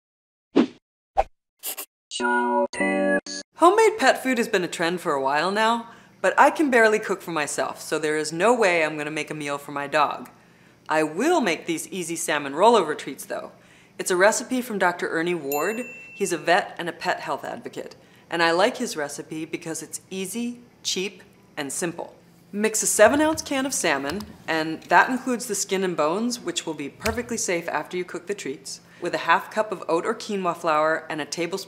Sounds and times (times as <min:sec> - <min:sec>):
Speech: 0:03.6 - 0:10.3, 0:10.9 - 0:31.6.